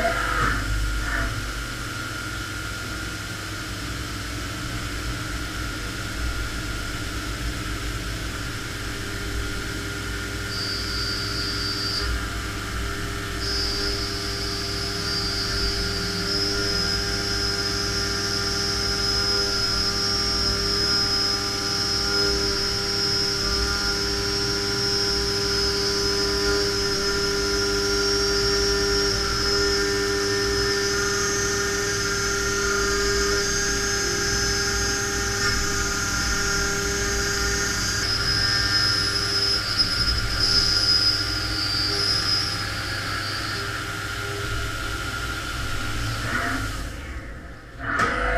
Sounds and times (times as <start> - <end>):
Engine: 0.0 - 48.3.